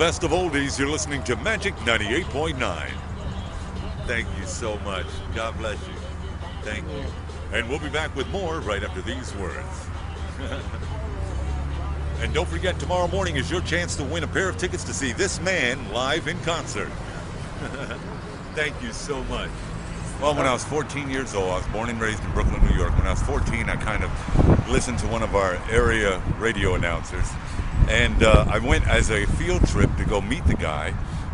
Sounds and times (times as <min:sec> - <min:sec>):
Speech: 0:00.0 - 0:03.0, 0:03.9 - 0:05.9, 0:06.6 - 0:09.8, 0:12.2 - 0:17.0, 0:18.6 - 0:19.5, 0:20.2 - 0:31.0
Music: 0:00.0 - 0:23.2.